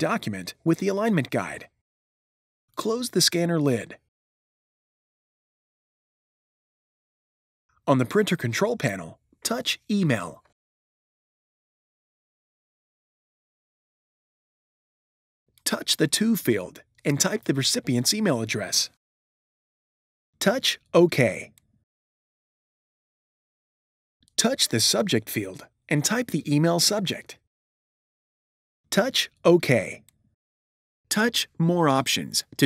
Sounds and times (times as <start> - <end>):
Speech: 0.0 - 1.8, 2.8 - 4.1, 7.9 - 10.6, 15.6 - 19.0, 20.4 - 21.6, 24.4 - 27.5, 28.9 - 30.1, 31.1 - 32.6.